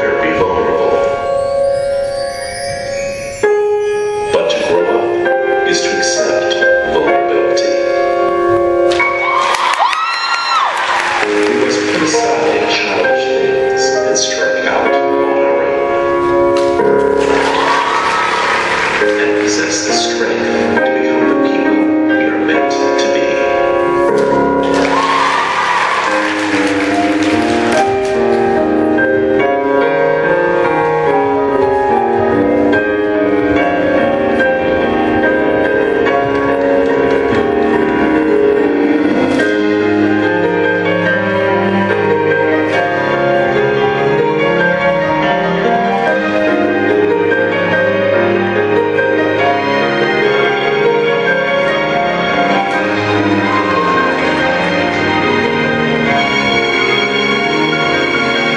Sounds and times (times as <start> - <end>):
Speech: 0.0 - 1.1, 4.3 - 7.8, 11.6 - 15.8, 19.1 - 23.5
Music: 0.0 - 58.5.